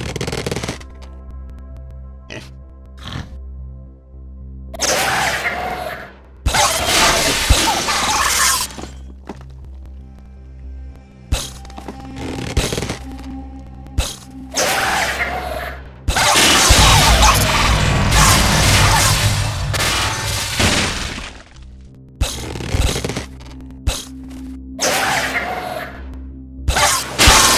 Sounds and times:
Music: 0.0s - 27.5s.

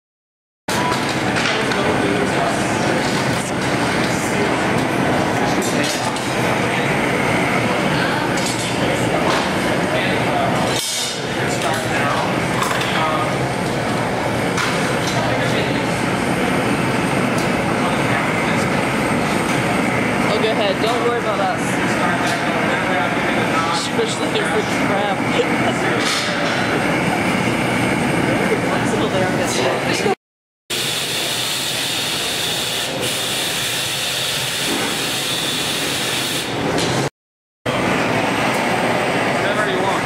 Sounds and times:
Speech: 0.7s - 4.8s, 5.4s - 7.0s, 7.6s - 13.4s, 15.0s - 16.5s, 17.6s - 18.9s, 20.2s - 26.6s, 28.4s - 30.2s, 39.4s - 40.0s.

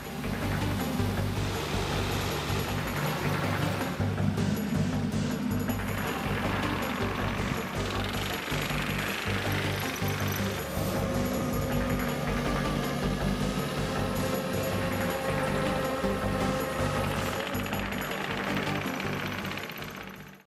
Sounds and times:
Music: 0.0s - 20.4s
Vehicle: 0.0s - 20.4s.

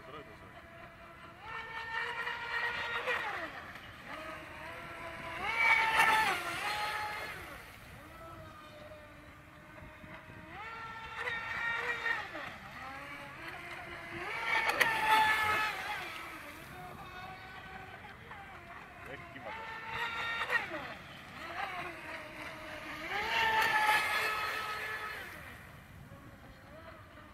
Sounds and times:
Motorboat, speedboat: 0.0s - 27.3s.

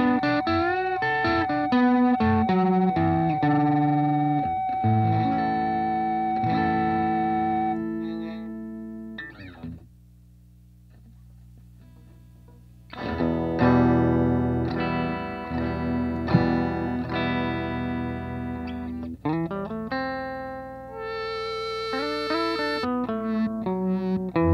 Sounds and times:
Effects unit: 0.0s - 24.5s
Electronic tuner: 0.0s - 24.5s
Guitar: 0.0s - 24.5s.

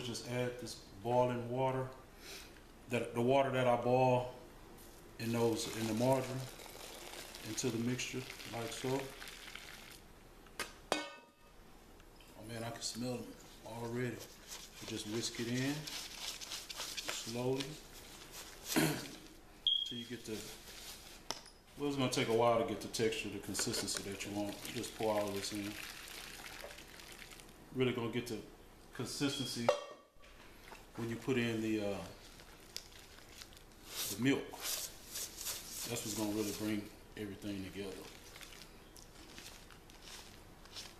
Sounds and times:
Speech: 0.0s - 2.0s, 2.9s - 4.4s, 5.2s - 6.5s, 7.4s - 9.2s, 12.4s - 15.9s, 17.2s - 17.8s, 19.8s - 20.6s, 21.8s - 25.8s, 27.7s - 29.8s, 31.0s - 32.2s, 34.1s - 34.6s, 35.8s - 38.1s.

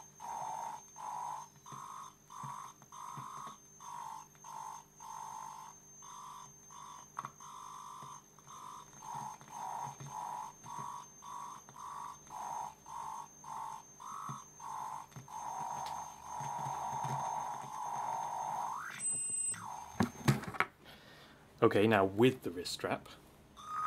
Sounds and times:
Theremin: 0.0s - 20.5s, 23.6s - 23.8s.

